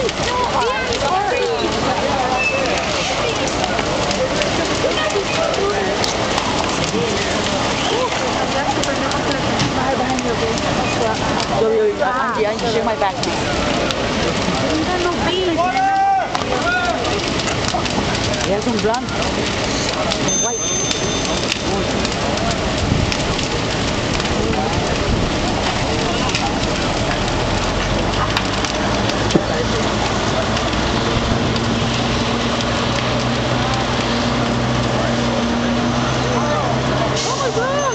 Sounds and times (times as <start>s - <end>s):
Bus: 0.0s - 17.7s, 18.5s - 37.9s
Speech: 0.0s - 22.8s, 24.1s - 30.8s, 33.3s - 37.9s.